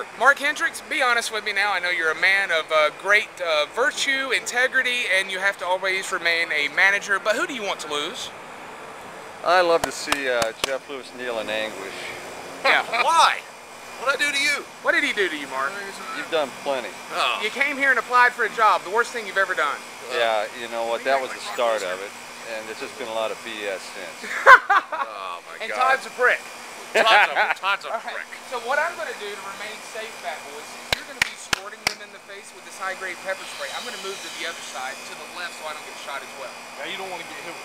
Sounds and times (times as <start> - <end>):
Speech: 0.0 - 8.3, 9.4 - 24.2, 25.0 - 26.4, 27.0 - 37.6.